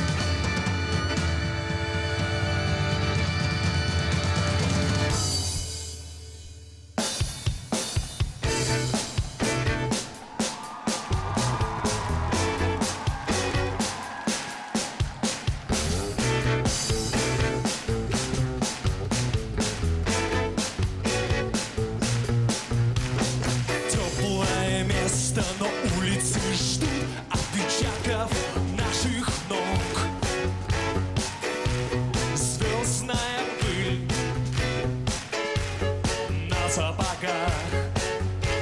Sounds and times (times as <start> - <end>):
Music: 0.0 - 38.6.